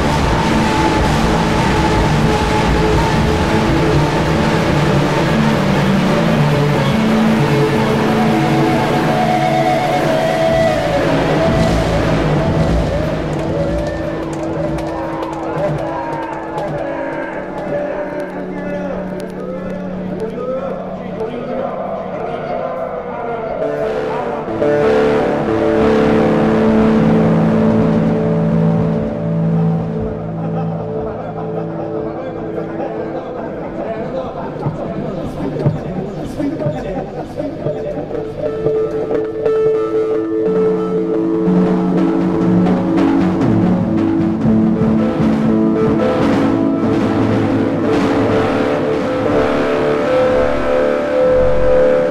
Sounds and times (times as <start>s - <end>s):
Music: 0.0s - 52.1s
Speech: 15.5s - 24.5s, 31.0s - 38.5s.